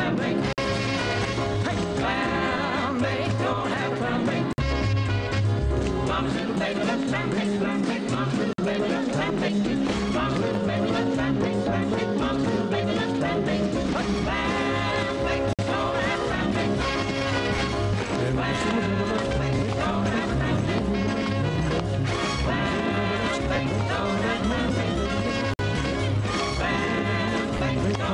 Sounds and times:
Rock and roll: 0:00.0 - 0:28.1.

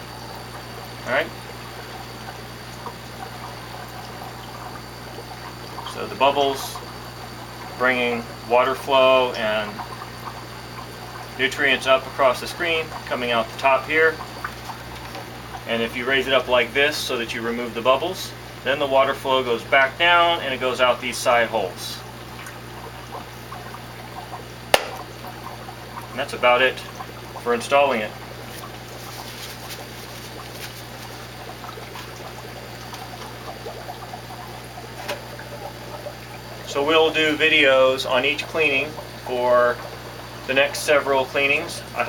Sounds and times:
Speech: 0:01.0 - 0:01.3, 0:05.9 - 0:06.8, 0:07.8 - 0:09.8, 0:11.4 - 0:14.2, 0:15.7 - 0:22.1, 0:26.2 - 0:28.2, 0:36.7 - 0:39.8, 0:40.5 - 0:42.0.

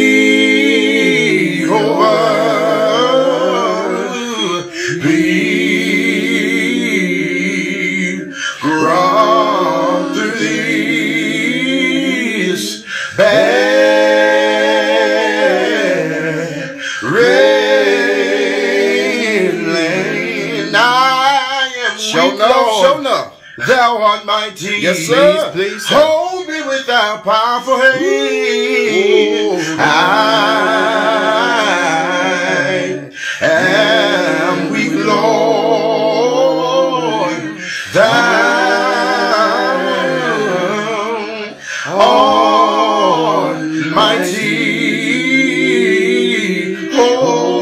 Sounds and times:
Male singing: 0:01.6 - 0:05.2, 0:20.6 - 0:45.5.

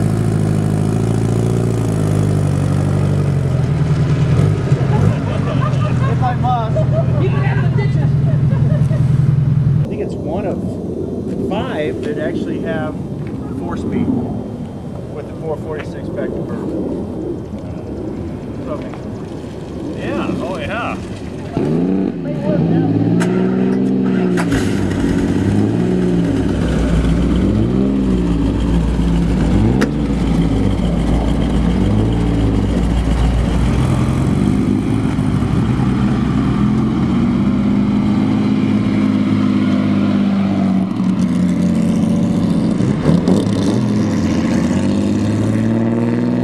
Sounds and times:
Speech: 0:15.2 - 0:16.7, 0:20.0 - 0:21.0
Accelerating, revving, vroom: 0:21.6 - 0:32.8, 0:33.4 - 0:46.4.

